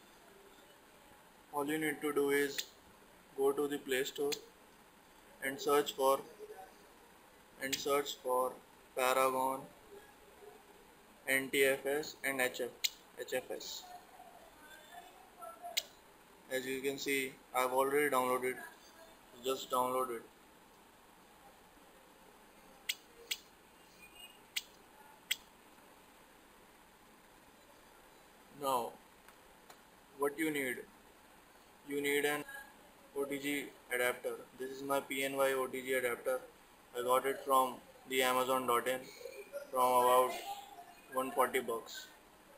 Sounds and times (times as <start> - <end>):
Inside, small room: 0.0 - 42.5.